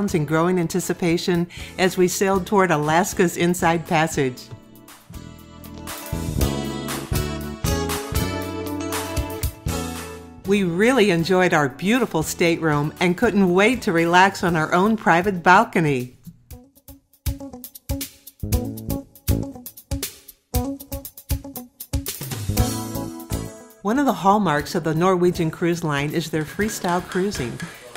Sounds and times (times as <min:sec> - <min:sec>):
Speech: 0:00.0 - 0:04.5, 0:10.5 - 0:16.1, 0:23.9 - 0:27.9
Music: 0:00.0 - 0:27.9.